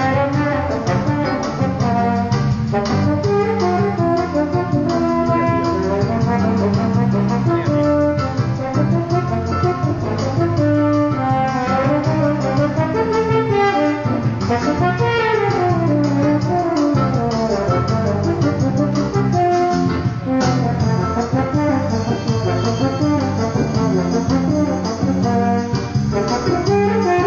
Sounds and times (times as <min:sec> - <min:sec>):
Music: 0:00.0 - 0:27.2.